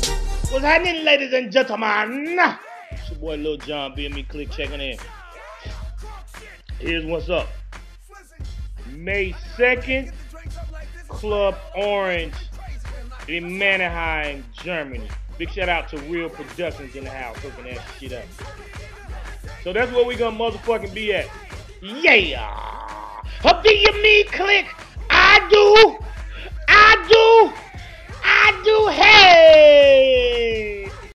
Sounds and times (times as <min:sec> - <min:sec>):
Music: 0:00.0 - 0:31.1
Speech: 0:00.6 - 0:05.0, 0:06.8 - 0:07.5, 0:08.8 - 0:10.1, 0:11.1 - 0:12.5, 0:13.3 - 0:18.3, 0:19.7 - 0:22.8, 0:23.4 - 0:26.0, 0:26.7 - 0:27.6, 0:28.2 - 0:31.0.